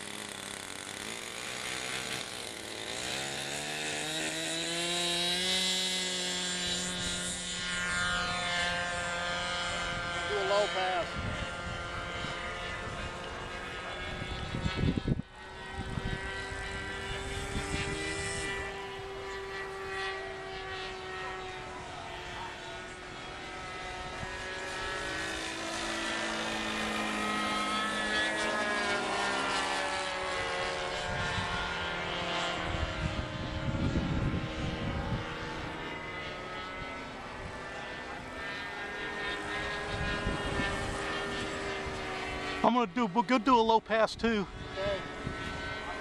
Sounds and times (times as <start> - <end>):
Accelerating, revving, vroom: 1.0 - 11.1, 11.7 - 42.8, 44.7 - 46.0.